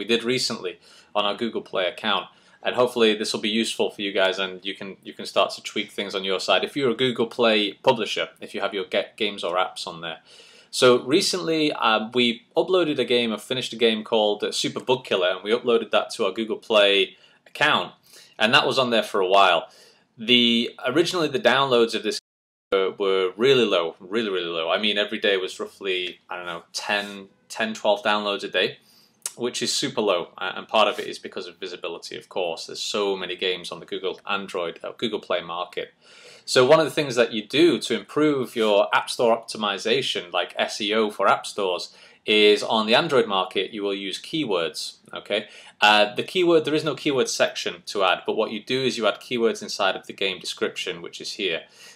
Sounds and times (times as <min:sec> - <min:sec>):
Speech: 0:00.0 - 0:51.7.